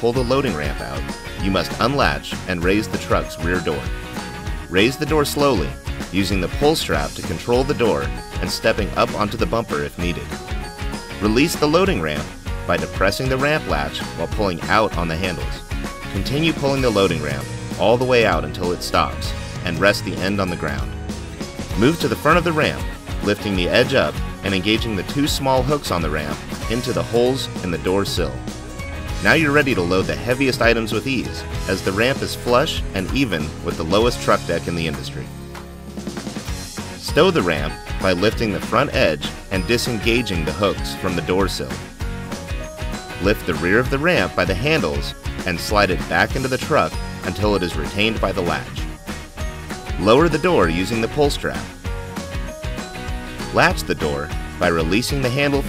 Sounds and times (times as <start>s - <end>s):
Speech: 0.0s - 3.9s, 4.7s - 10.3s, 11.2s - 15.6s, 16.2s - 20.9s, 21.7s - 28.4s, 29.2s - 35.3s, 37.0s - 41.8s, 43.2s - 48.8s, 50.0s - 51.7s, 53.5s - 55.6s
Music: 0.0s - 55.6s.